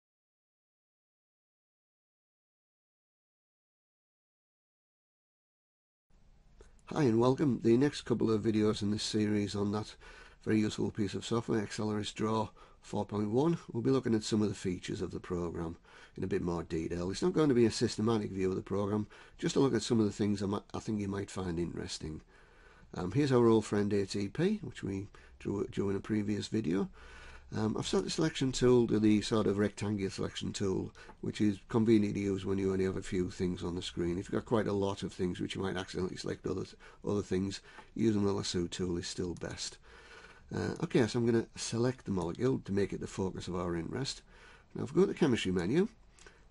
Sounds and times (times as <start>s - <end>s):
Speech: 6.9s - 22.3s, 22.9s - 39.8s, 40.5s - 46.0s.